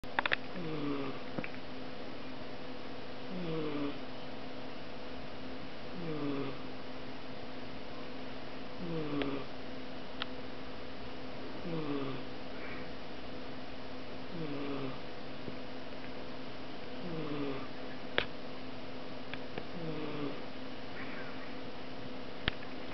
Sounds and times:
Snoring: 0.6 - 1.2, 3.3 - 4.0, 5.9 - 6.6, 8.8 - 9.5, 11.6 - 12.3, 14.3 - 15.0, 17.0 - 17.7, 19.7 - 20.4.

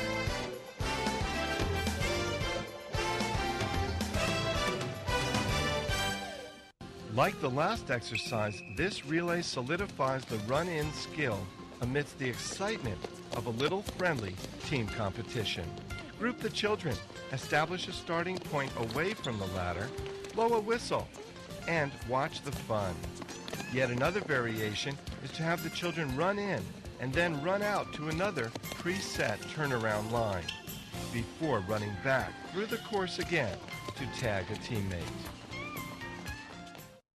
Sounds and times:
Run: 0.0 - 6.3, 7.8 - 37.0
Music: 0.0 - 37.0
Speech: 7.1 - 30.5, 31.1 - 35.3.

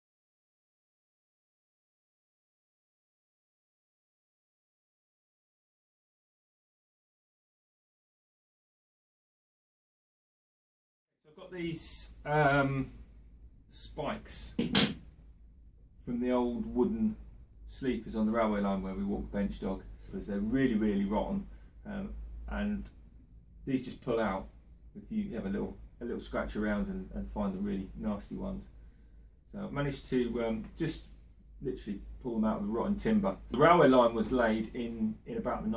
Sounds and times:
Speech: 11.3 - 13.0, 13.7 - 14.6, 16.0 - 23.0, 23.6 - 28.7, 29.5 - 35.7.

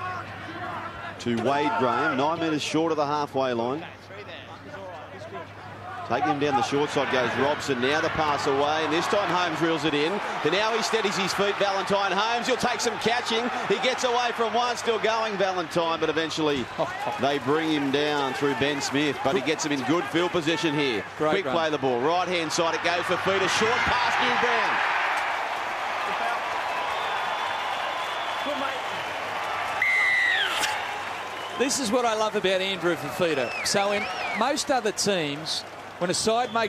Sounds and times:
Speech: 0.0 - 24.8, 31.6 - 36.6.

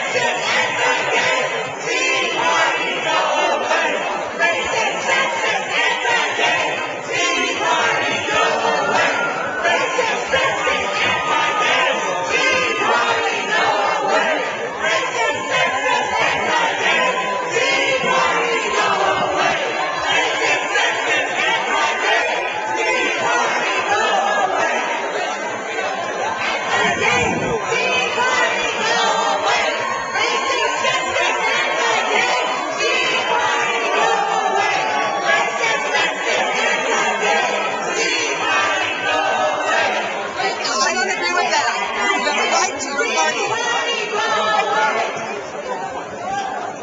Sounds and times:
Speech: 0.0 - 46.8.

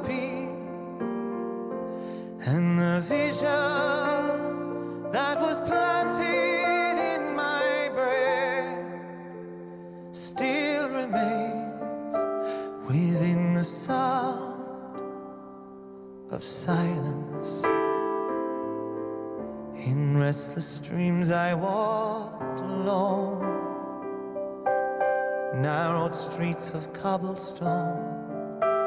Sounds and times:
Music: 0.0 - 28.8.

